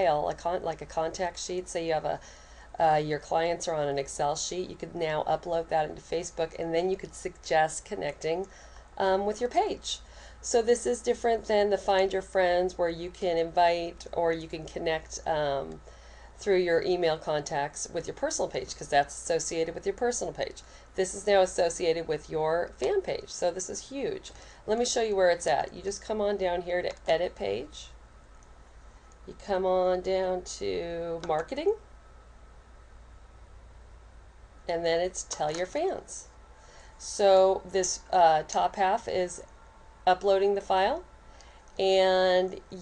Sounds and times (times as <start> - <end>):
Speech: 0.0 - 2.2, 2.8 - 15.8, 16.4 - 28.0, 29.3 - 31.8, 34.7 - 36.3, 37.0 - 39.5, 40.1 - 41.1, 41.8 - 42.8.